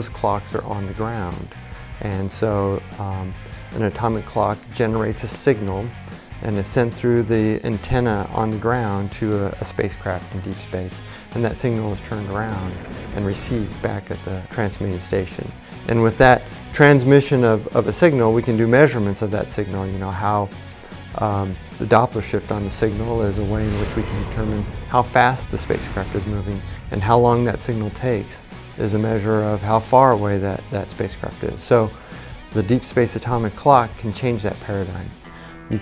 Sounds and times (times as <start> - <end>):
Music: 0.0 - 35.8
Speech: 0.0 - 35.8.